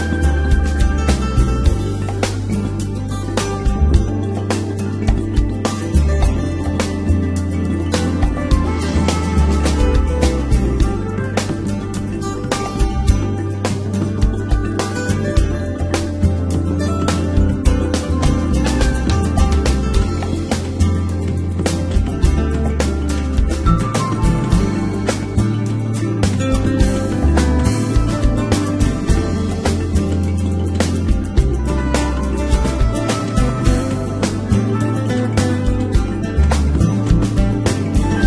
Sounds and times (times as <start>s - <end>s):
Music: 0.0s - 38.2s.